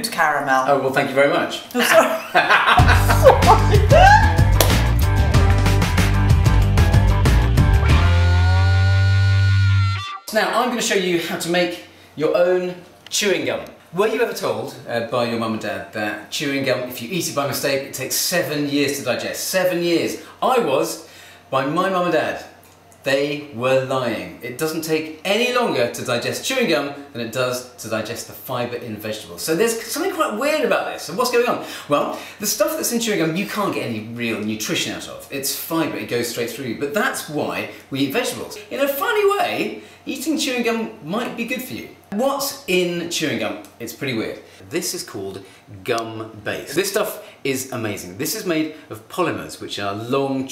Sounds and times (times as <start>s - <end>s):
Speech: 10.3s - 50.5s.